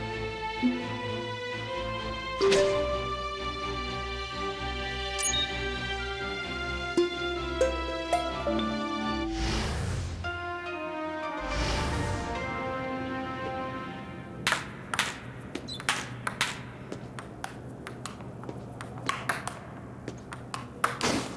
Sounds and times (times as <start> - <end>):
Music: 0.0 - 15.4.